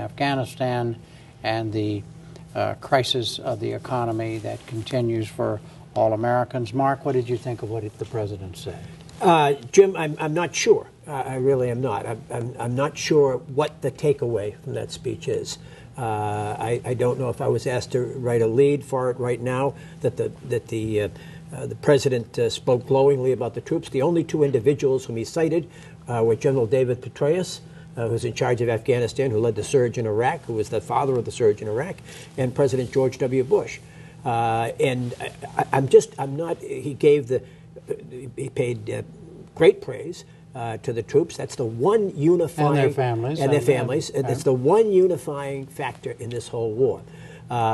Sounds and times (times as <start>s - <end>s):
Male speech, man speaking: 0.0s - 47.7s
Narration, monologue: 0.0s - 47.7s.